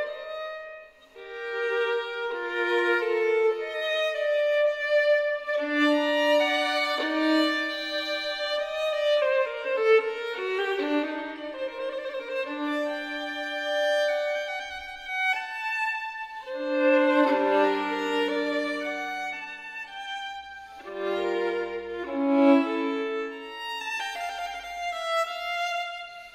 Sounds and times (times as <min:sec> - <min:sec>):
Violin, fiddle: 0:00.0 - 0:26.3.